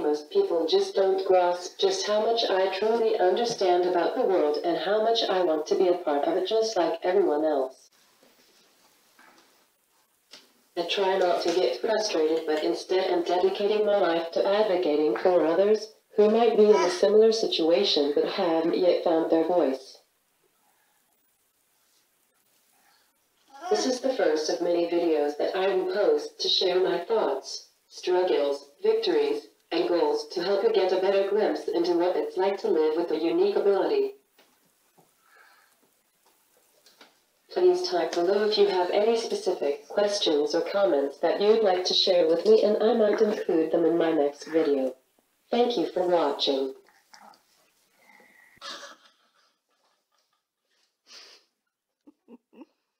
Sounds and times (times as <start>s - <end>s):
Speech: 0.0s - 7.9s, 10.8s - 20.1s, 23.6s - 34.2s, 37.5s - 47.4s
Inside, small room: 0.0s - 53.0s.